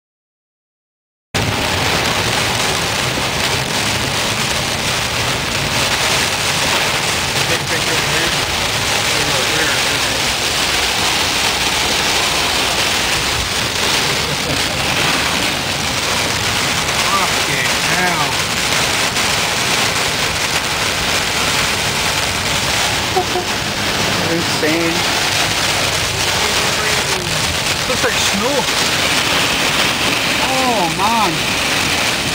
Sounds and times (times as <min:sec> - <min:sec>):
Rain: 0:01.4 - 0:32.3
Vehicle: 0:01.4 - 0:32.3.